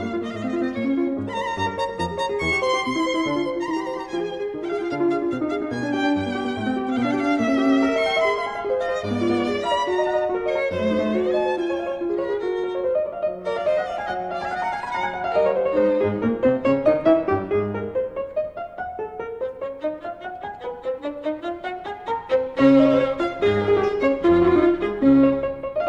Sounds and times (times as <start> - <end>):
Violin, fiddle: 0.0 - 17.9, 19.0 - 25.8
Piano: 0.0 - 25.8.